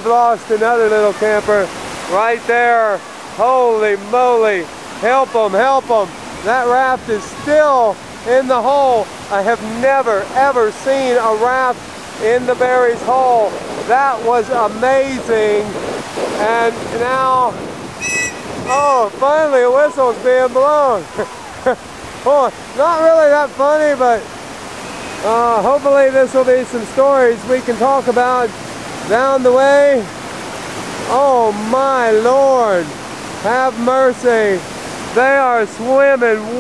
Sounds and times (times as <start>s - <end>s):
Speech: 0.0s - 15.7s, 16.4s - 17.5s, 18.7s - 21.4s, 22.3s - 24.2s, 25.2s - 28.5s, 29.1s - 30.1s, 31.1s - 34.6s, 35.2s - 36.6s
Stream: 0.0s - 36.6s.